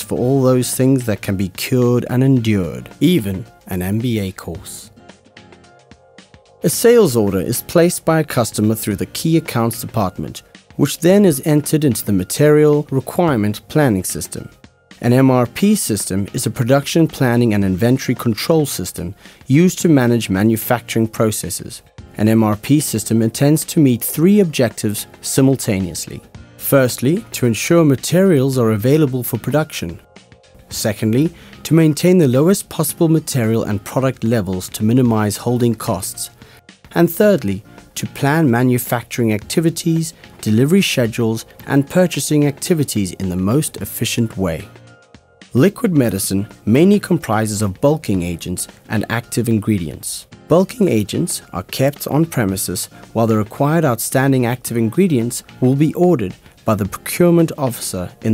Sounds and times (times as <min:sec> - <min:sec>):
Speech: 0:00.0 - 0:04.9, 0:06.6 - 0:30.0, 0:30.7 - 0:44.7, 0:45.5 - 0:58.3
Music: 0:00.0 - 0:58.3.